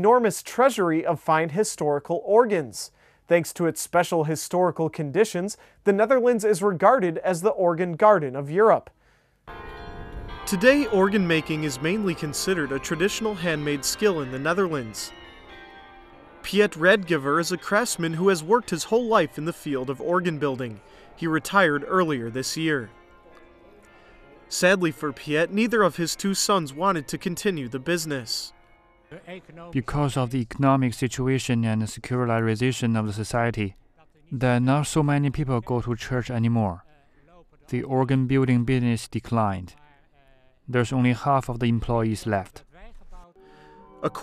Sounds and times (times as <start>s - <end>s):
Speech: 0.0s - 9.0s, 10.5s - 15.1s, 16.5s - 22.9s, 24.5s - 28.5s, 29.2s - 43.4s
Music: 9.5s - 29.7s, 43.4s - 44.2s.